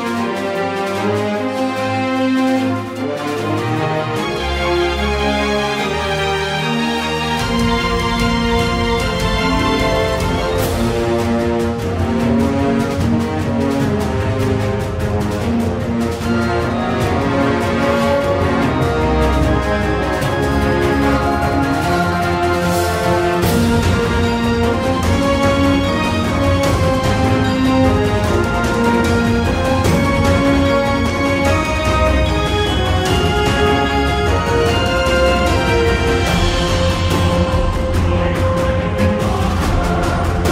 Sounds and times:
Theme music: 0:00.0 - 0:40.5.

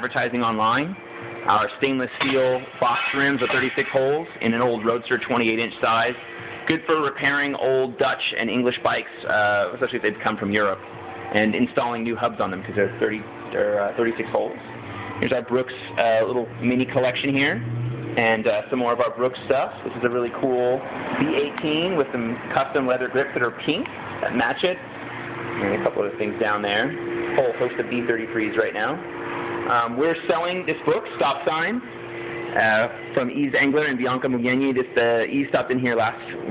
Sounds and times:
Speech: 0:00.0 - 0:14.6, 0:15.2 - 0:17.6, 0:18.2 - 0:24.9, 0:25.6 - 0:29.0, 0:29.7 - 0:31.9, 0:32.6 - 0:36.5.

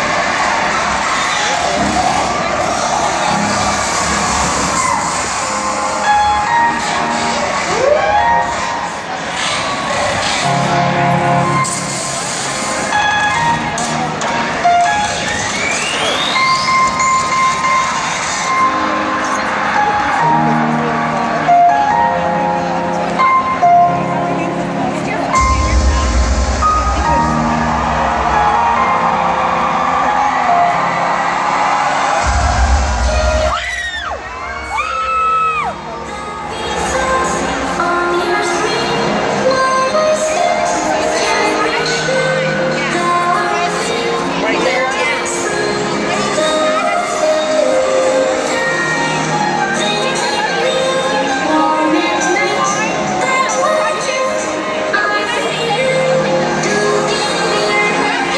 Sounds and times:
Music: 0:00.0 - 0:58.3
Speech: 0:18.7 - 0:27.7, 0:35.7 - 0:58.3.

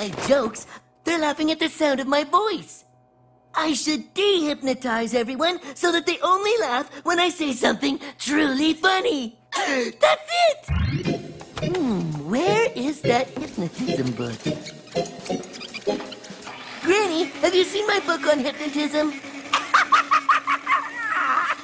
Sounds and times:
Speech: 0:00.0 - 0:02.9, 0:03.6 - 0:10.7, 0:11.8 - 0:14.4, 0:16.8 - 0:19.2
Music: 0:10.6 - 0:19.4.

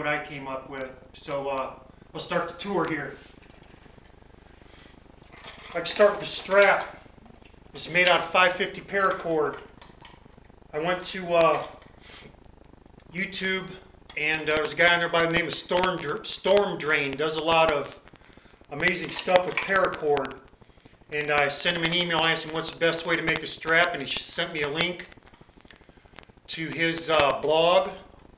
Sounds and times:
Speech: 0:00.0 - 0:03.3, 0:05.7 - 0:07.0, 0:07.8 - 0:09.7, 0:10.8 - 0:11.8, 0:13.1 - 0:18.0, 0:18.7 - 0:20.4, 0:21.1 - 0:25.1, 0:26.5 - 0:28.1.

